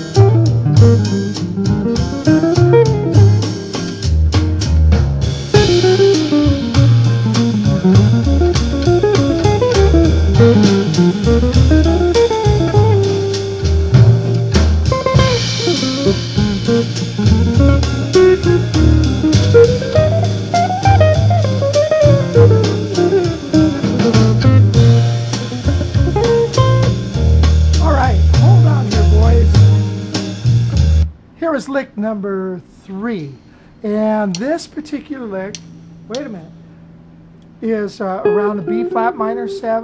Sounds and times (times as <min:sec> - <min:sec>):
Acoustic guitar: 0:00.0 - 0:31.1, 0:38.2 - 0:39.8
Electric guitar: 0:00.0 - 0:31.1, 0:38.2 - 0:39.8
Strum: 0:00.0 - 0:31.2, 0:38.2 - 0:39.8.